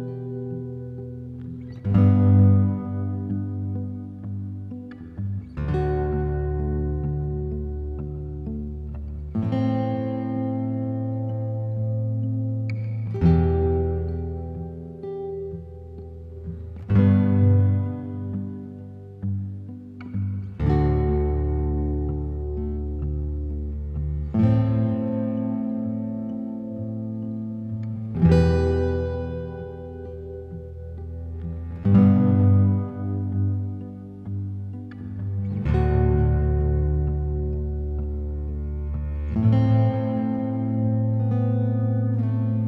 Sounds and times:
Acoustic guitar: 0.0 - 42.6
Strum: 0.0 - 42.6.

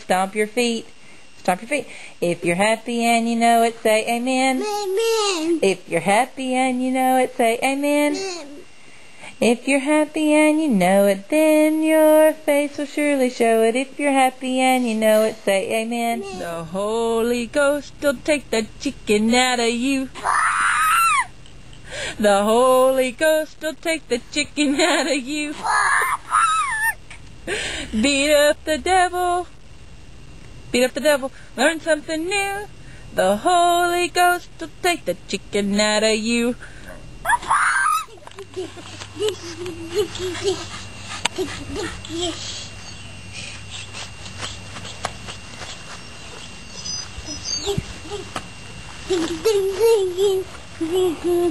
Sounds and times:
Speech: 0.0 - 5.9.

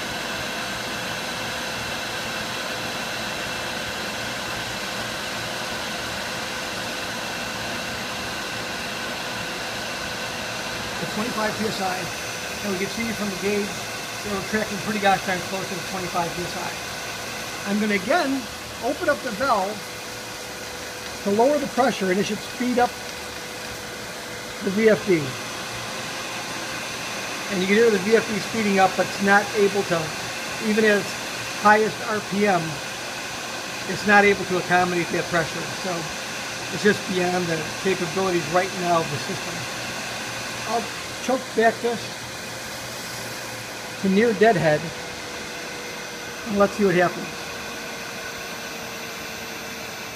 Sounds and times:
Speech: 11.0 - 16.8, 17.6 - 19.8, 21.2 - 23.0, 24.6 - 25.4, 27.5 - 32.8, 33.9 - 39.7, 40.7 - 42.2, 44.0 - 45.0, 46.5 - 47.4.

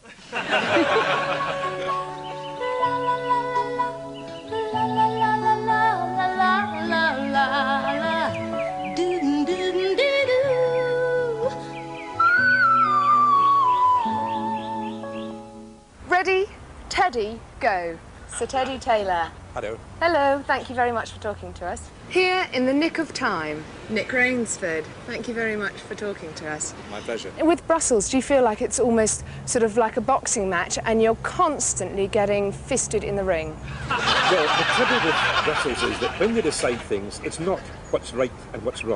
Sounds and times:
Music: 0.8 - 15.9.

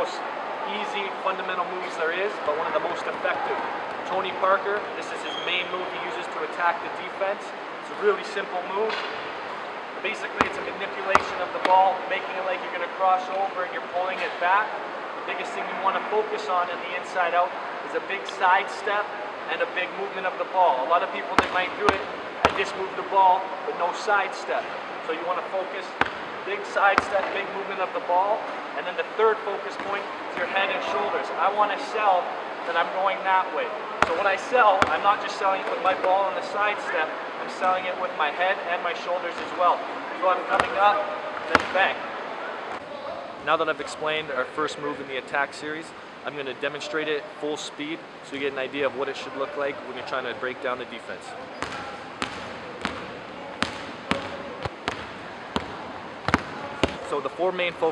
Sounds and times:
Speech: 0.0 - 9.0, 10.0 - 42.0, 42.8 - 52.0, 56.9 - 57.9.

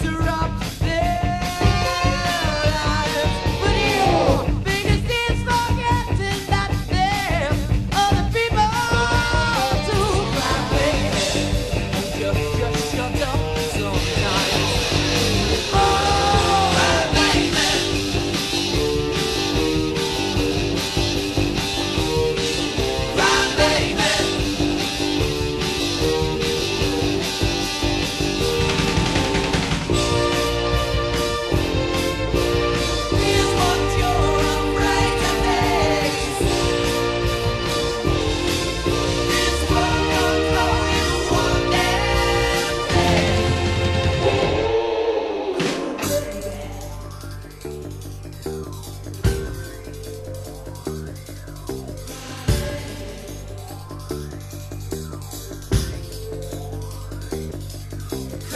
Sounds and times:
Guitar: 0.0 - 58.5
Ska: 0.0 - 58.5.

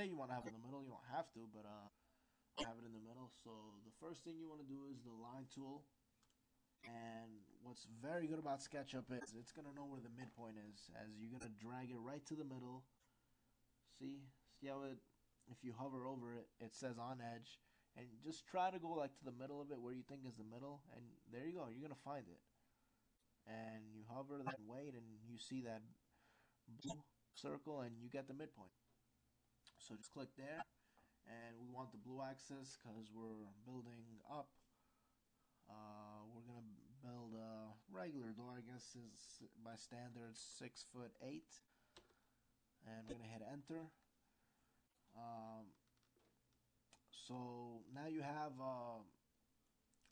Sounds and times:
Speech: 0.0 - 2.0, 2.6 - 6.0, 6.8 - 13.0, 13.9 - 22.5, 23.5 - 26.0, 26.7 - 28.8, 29.7 - 30.7, 31.3 - 34.6, 35.7 - 41.7, 42.8 - 44.0, 45.1 - 45.8, 47.0 - 49.2.

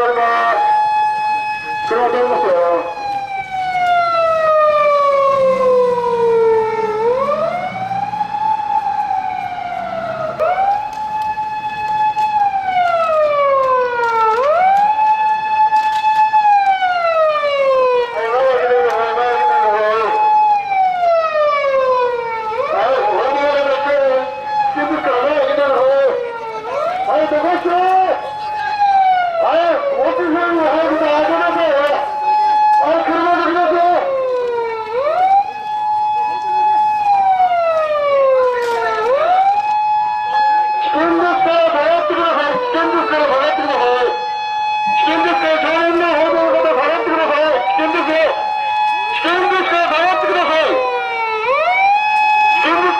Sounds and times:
Police car (siren): 0.0 - 52.9.

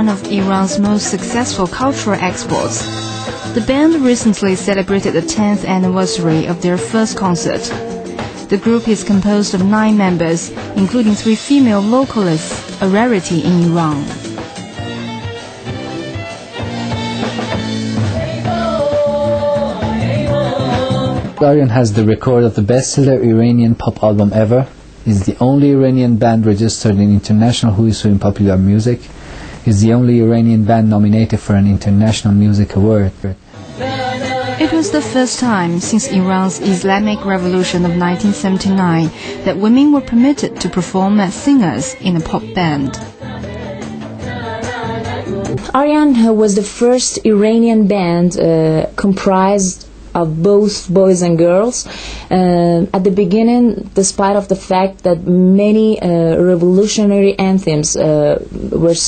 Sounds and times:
Speech: 0.0 - 2.9, 3.6 - 7.8, 8.5 - 14.2, 21.4 - 29.1, 29.7 - 33.4, 34.6 - 43.0, 45.6 - 59.0
Music: 0.0 - 22.2, 33.4 - 50.1.

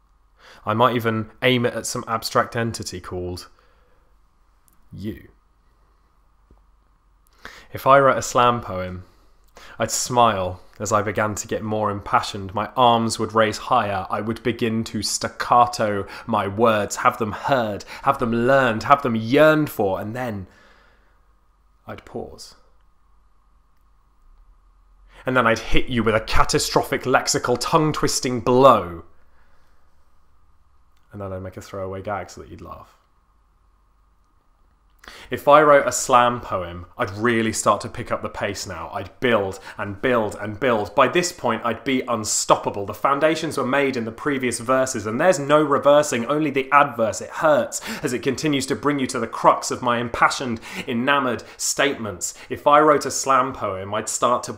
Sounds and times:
Speech: 0.6 - 3.6, 4.9 - 5.4, 7.7 - 9.1, 9.8 - 20.5, 21.8 - 22.7, 25.2 - 29.1, 31.1 - 33.0, 35.3 - 54.5.

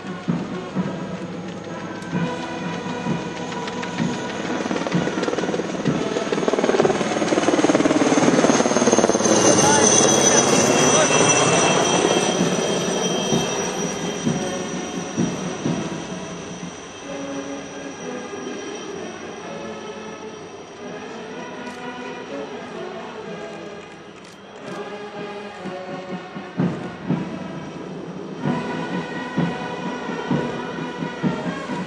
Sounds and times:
Music: 0.0 - 31.8
Male speech, man speaking: 9.5 - 11.8.

